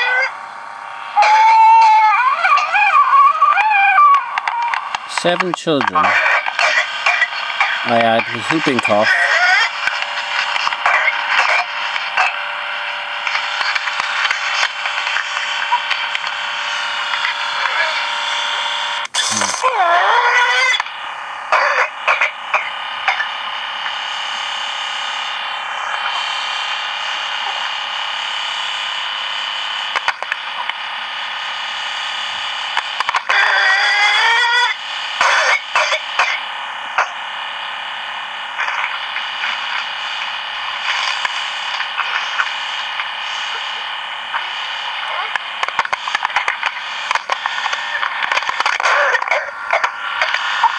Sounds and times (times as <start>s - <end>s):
Speech: 5.1s - 6.3s, 7.9s - 9.2s, 19.3s - 19.7s.